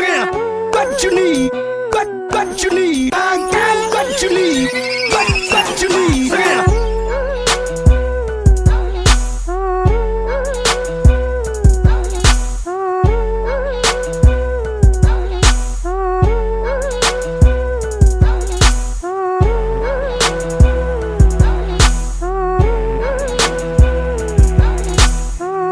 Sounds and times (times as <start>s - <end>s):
Music: 0.0s - 25.7s.